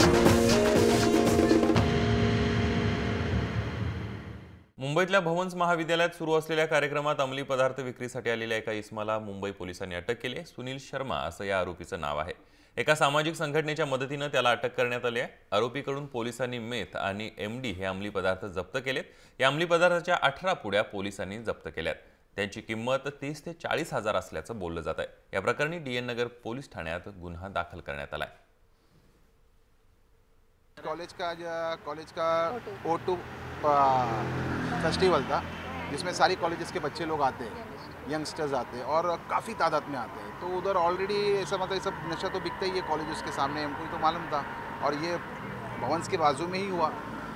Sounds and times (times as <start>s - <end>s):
Speech: 4.8s - 28.4s, 30.8s - 34.2s, 34.8s - 47.0s.